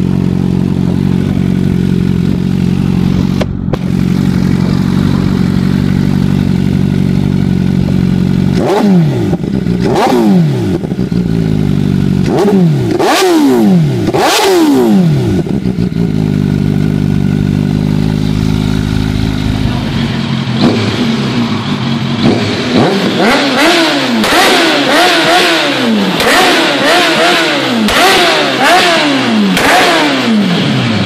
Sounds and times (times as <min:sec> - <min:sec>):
Motorcycle: 0:00.0 - 0:31.0.